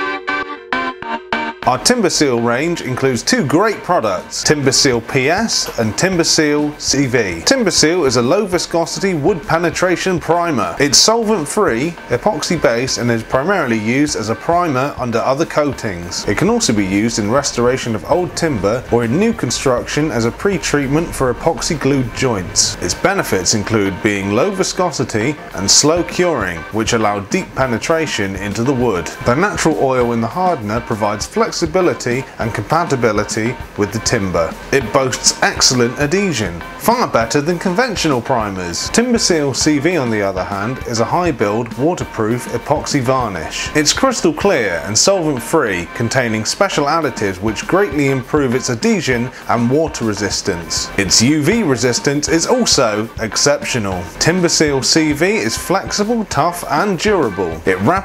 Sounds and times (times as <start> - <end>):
Music: 0.0 - 58.0
Speech: 1.7 - 58.0.